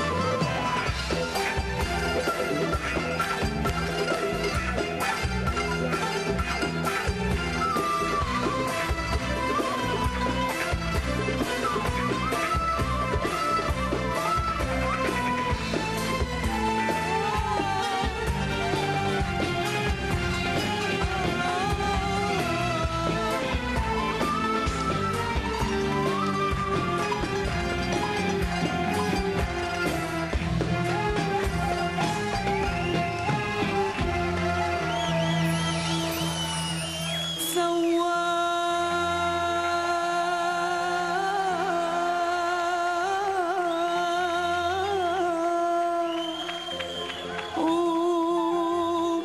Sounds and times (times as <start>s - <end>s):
Music: 0.0s - 49.2s.